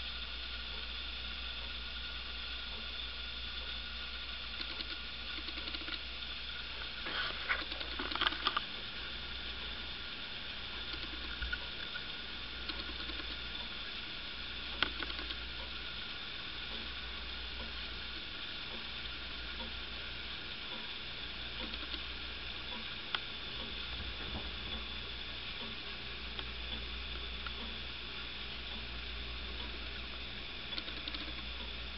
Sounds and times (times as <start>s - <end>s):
Tick-tock: 4.6s - 6.0s, 21.6s - 22.1s, 30.7s - 31.8s.